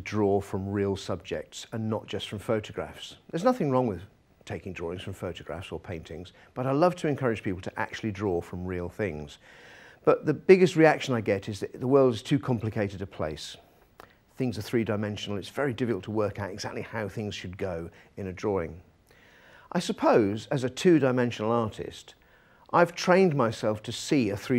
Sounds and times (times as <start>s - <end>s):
Speech: 0.0s - 9.4s, 10.0s - 13.7s, 14.4s - 18.9s, 19.7s - 24.5s.